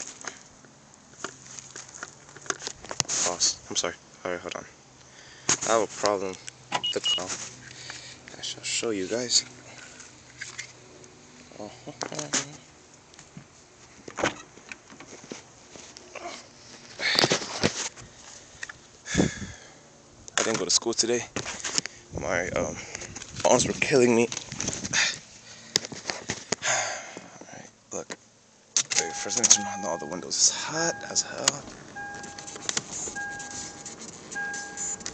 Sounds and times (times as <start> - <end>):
Outside, urban or manmade: 0.0 - 35.1
Speech: 3.2 - 4.8, 5.7 - 7.4, 8.3 - 9.5, 11.6 - 12.7, 20.4 - 21.3, 22.2 - 22.8, 23.4 - 24.3, 29.0 - 31.7.